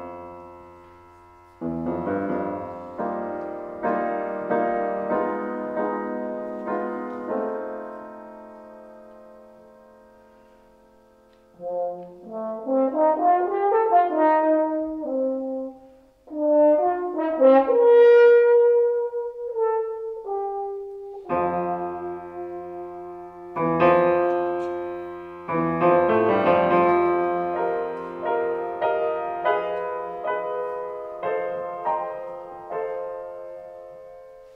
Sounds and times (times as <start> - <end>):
French horn: 0.0 - 34.5
Piano: 0.0 - 34.5.